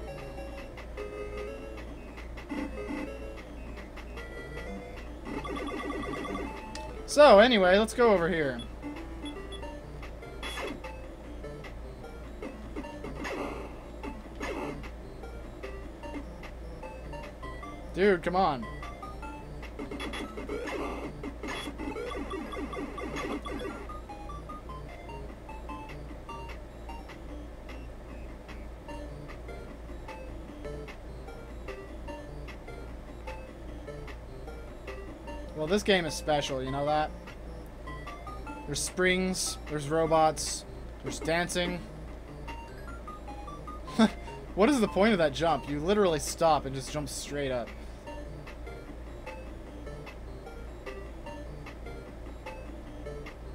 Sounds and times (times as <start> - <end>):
Music: 0.0 - 53.5.